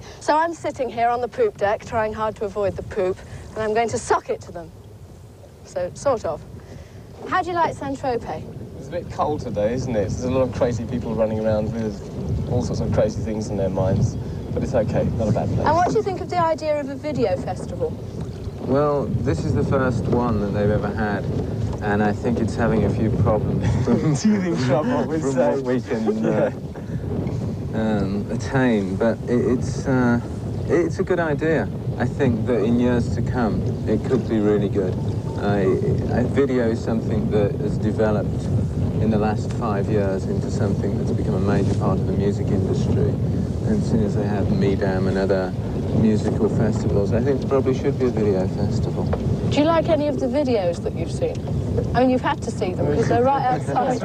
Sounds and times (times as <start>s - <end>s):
Rowboat, canoe, kayak: 0.0s - 54.0s.